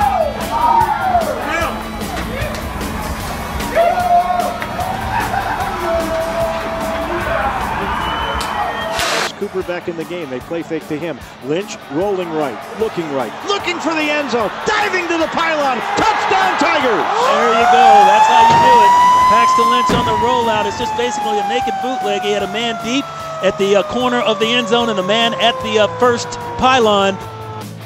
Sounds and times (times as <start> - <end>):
Hubbub, speech noise, speech babble: 0.0 - 19.4
Music: 0.0 - 27.8
Speech: 9.3 - 27.2.